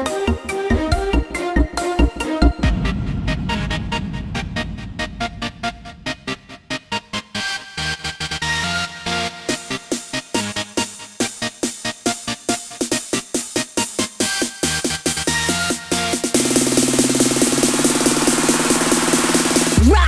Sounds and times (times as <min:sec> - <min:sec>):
Music: 0:00.0 - 0:20.0.